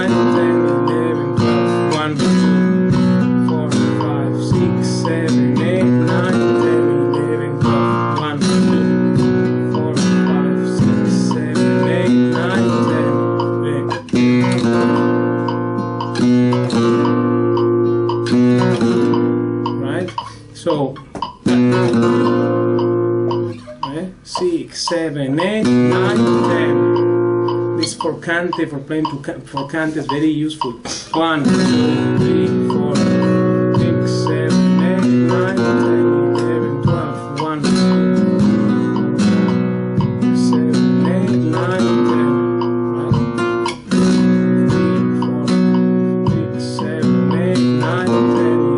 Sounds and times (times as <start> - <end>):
Strum: 0.0 - 48.7.